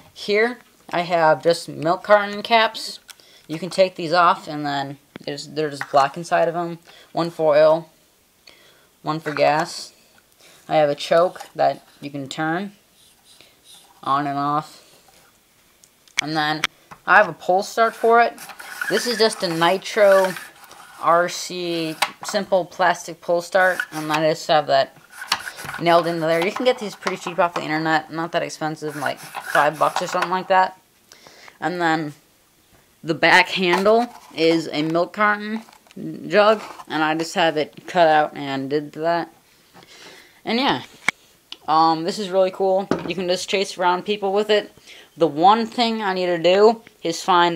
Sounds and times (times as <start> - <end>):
Speech: 0.0 - 7.9, 9.0 - 10.0, 10.7 - 12.8, 14.0 - 14.8, 16.2 - 24.9, 25.6 - 30.8, 31.6 - 32.2, 33.0 - 39.4, 40.4 - 40.9, 41.6 - 47.5
Inside, small room: 0.0 - 47.5.